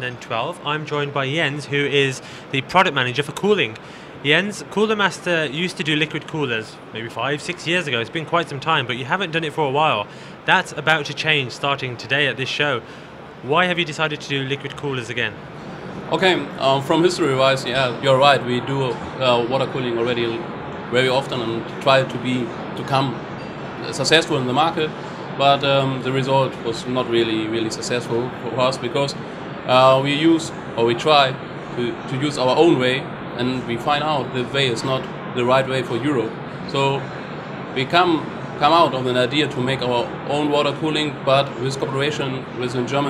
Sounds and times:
Speech: 0.0 - 15.4, 16.1 - 23.2, 23.8 - 37.0, 37.8 - 43.0.

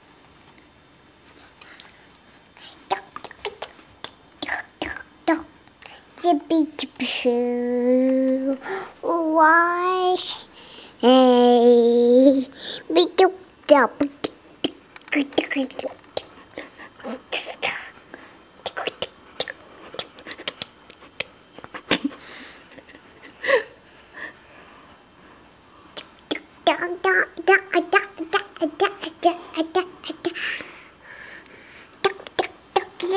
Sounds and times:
Child speech, kid speaking: 4.8 - 5.5, 6.2 - 10.4, 11.0 - 14.3, 15.1 - 16.0, 26.7 - 30.4, 32.1 - 33.1.

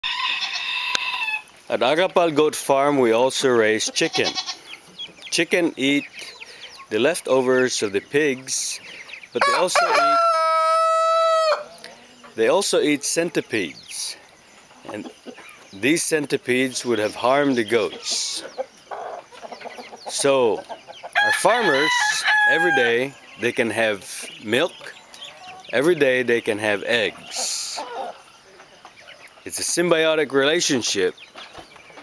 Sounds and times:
Crowing, cock-a-doodle-doo: 0.0 - 1.5, 9.4 - 11.7, 21.2 - 23.1.

